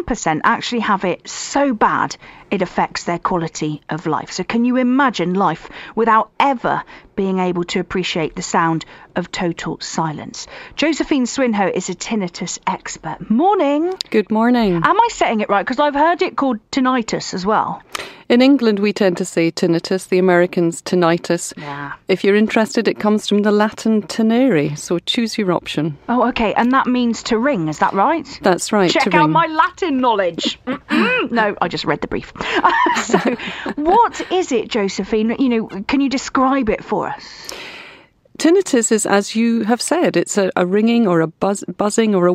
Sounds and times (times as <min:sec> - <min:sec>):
Speech: 0:00.0 - 0:37.4, 0:38.4 - 0:42.3.